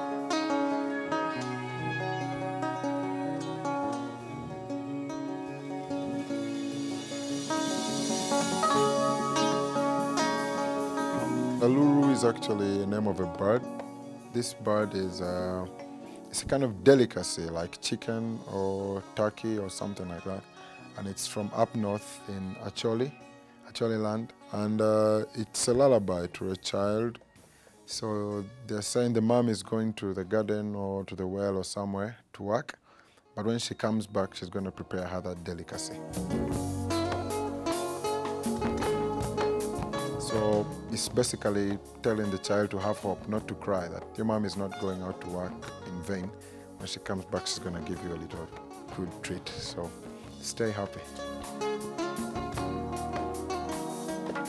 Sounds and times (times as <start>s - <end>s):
Music: 0.0s - 54.4s
Speech: 11.6s - 13.7s, 14.3s - 15.7s, 16.3s - 20.4s, 21.0s - 27.2s, 27.9s - 32.8s, 33.4s - 36.0s, 40.2s - 51.1s.